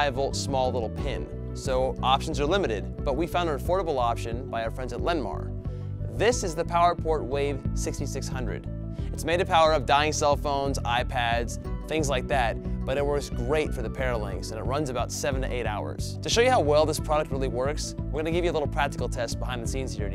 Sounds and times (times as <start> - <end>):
Speech: 0.0 - 5.5, 6.2 - 8.6, 9.2 - 20.1
Music: 0.0 - 20.1.